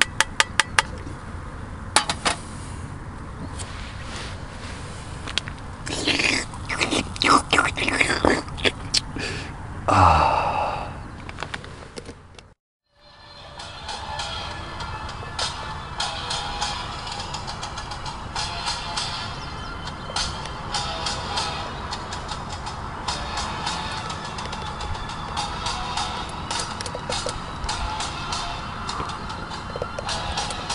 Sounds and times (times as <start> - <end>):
Outside, rural or natural: 0.0 - 30.7
Music: 12.9 - 30.7.